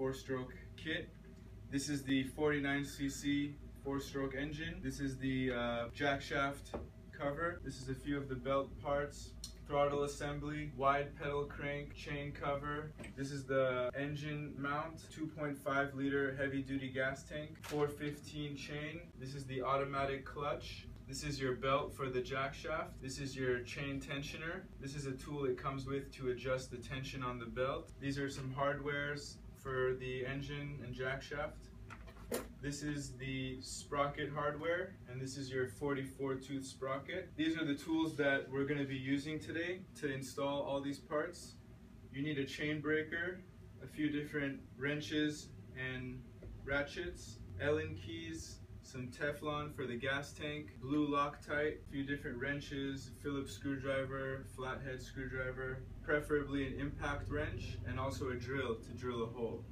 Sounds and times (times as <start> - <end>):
Speech: 0.0 - 31.8, 32.4 - 59.7.